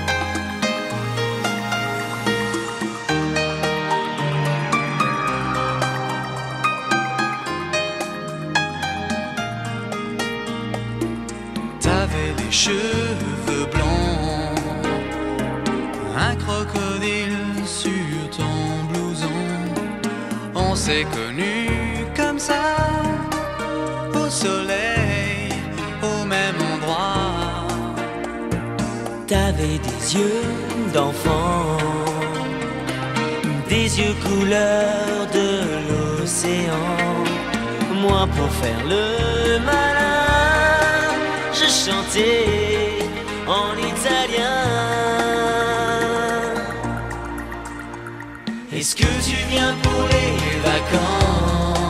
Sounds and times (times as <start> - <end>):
Music: 0.0 - 51.9.